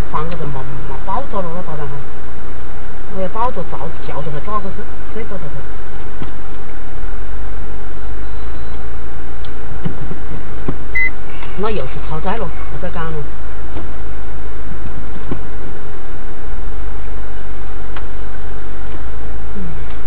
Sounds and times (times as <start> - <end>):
Speech: 0.0 - 2.0, 3.1 - 5.6, 11.4 - 13.3.